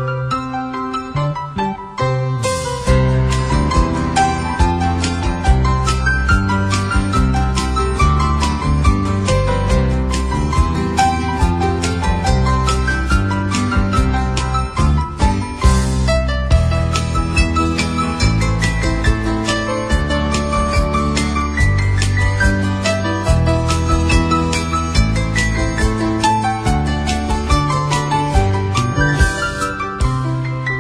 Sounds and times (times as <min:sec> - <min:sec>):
Music: 0:00.0 - 0:30.8.